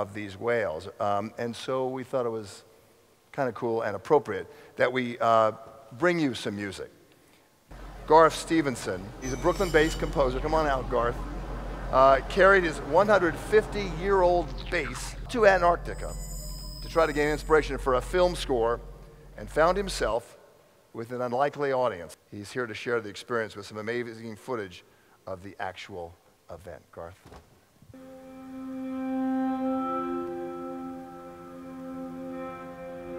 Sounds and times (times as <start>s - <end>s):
Speech: 0.0s - 2.6s, 3.3s - 6.9s, 8.1s - 11.2s, 12.0s - 16.1s, 16.8s - 18.8s, 19.4s - 20.3s, 21.0s - 27.3s
Music: 28.0s - 33.1s.